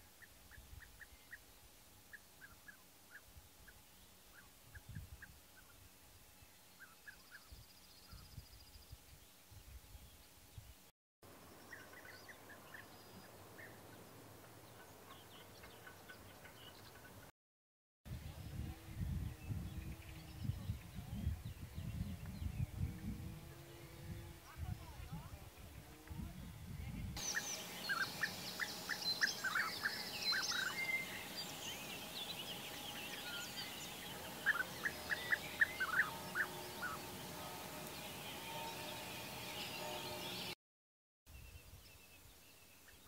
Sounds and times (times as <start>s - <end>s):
Bird vocalization, bird call, bird song: 0.0s - 10.8s, 11.4s - 17.3s, 18.2s - 25.4s, 26.0s - 40.6s, 41.3s - 43.0s
Environmental noise: 0.0s - 17.3s, 18.1s - 40.6s, 41.3s - 43.0s.